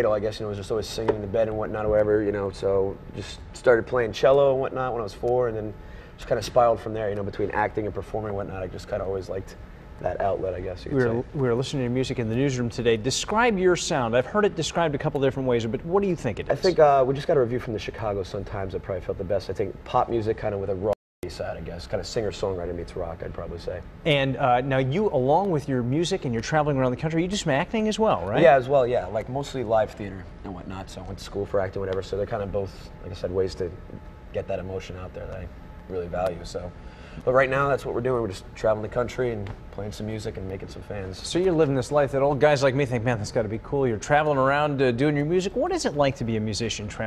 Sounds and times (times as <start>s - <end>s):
Speech: 0.0s - 33.8s.